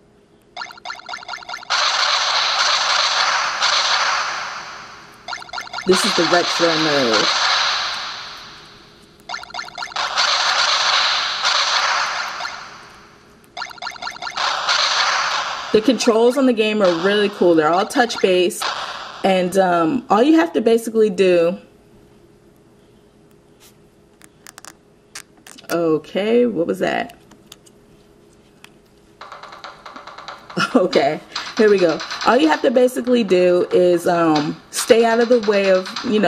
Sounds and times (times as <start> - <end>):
Speech: 5.9 - 7.3, 15.8 - 18.6, 19.2 - 21.7, 25.6 - 27.2, 30.6 - 36.2.